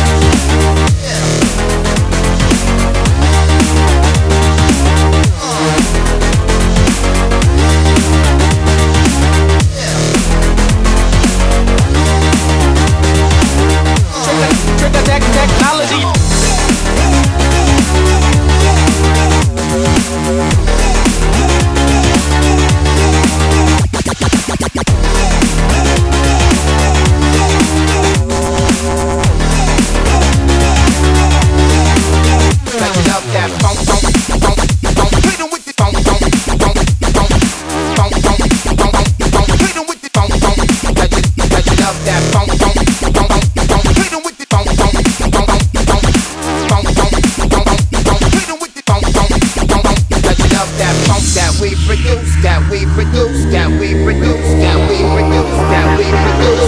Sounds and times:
Dubstep: 0.0 - 56.6.

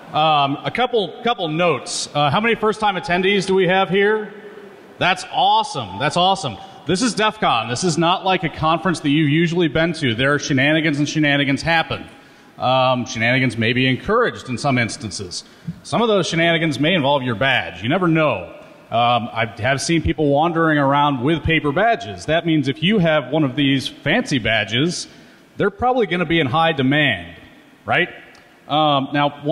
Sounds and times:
Speech: 0.1 - 4.4, 5.0 - 29.5.

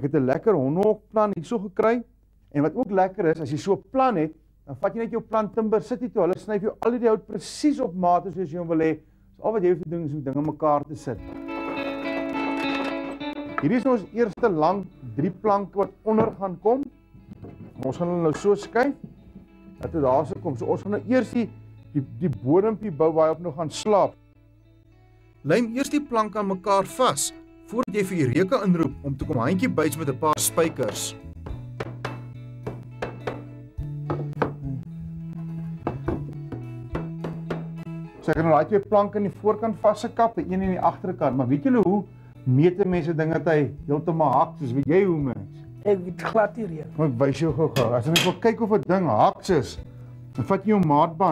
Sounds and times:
Speech: 0.0 - 11.2, 13.6 - 16.9, 17.8 - 19.0, 19.8 - 24.2, 25.5 - 31.2, 38.2 - 49.8, 50.4 - 51.3
Music: 0.0 - 51.3.

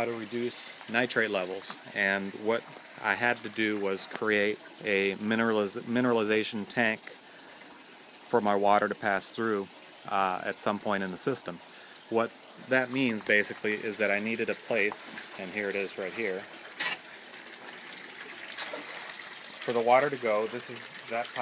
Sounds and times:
Water: 0.0 - 21.4.

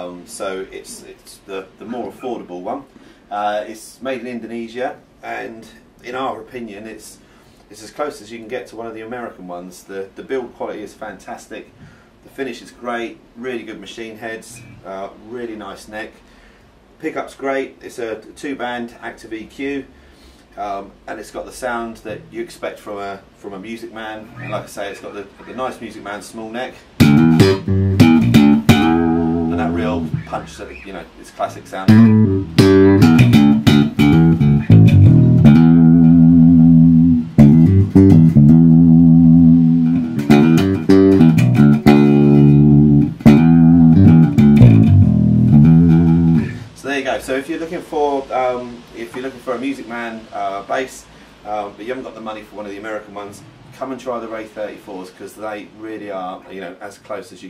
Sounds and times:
Speech: 0.0 - 16.3, 17.0 - 20.0, 20.6 - 27.0, 28.9 - 32.2, 46.4 - 57.4
Bass guitar: 14.6 - 14.9, 22.1 - 22.4, 24.3 - 24.8, 27.0 - 30.8, 31.7 - 46.8
Strum: 27.0 - 30.8, 31.6 - 46.8.

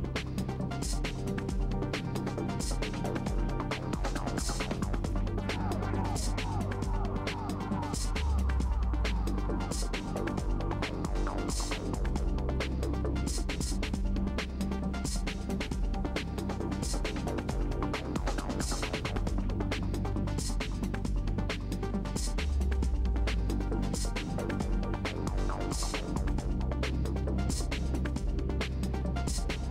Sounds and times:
Music: 0.0 - 29.7.

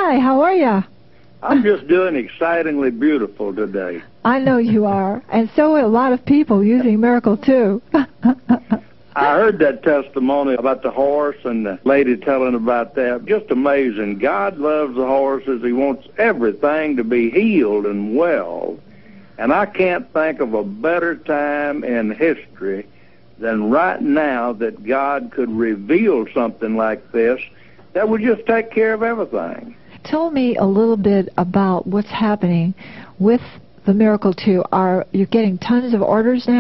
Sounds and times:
Speech: 1.4 - 7.8, 9.2 - 18.8, 19.4 - 36.6
Radio: 9.2 - 22.8.

